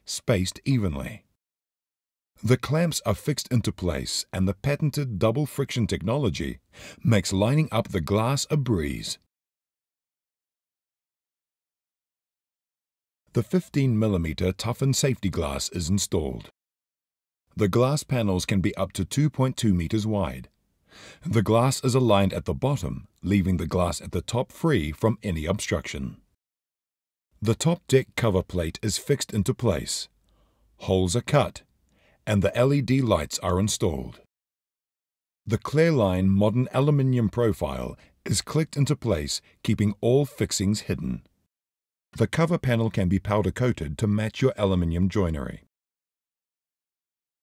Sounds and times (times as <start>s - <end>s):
Speech: 0.0s - 1.3s, 2.4s - 9.3s, 13.3s - 16.6s, 17.6s - 20.5s, 21.2s - 26.2s, 27.4s - 30.1s, 30.8s - 31.7s, 32.3s - 34.3s, 35.5s - 41.3s, 42.2s - 45.7s.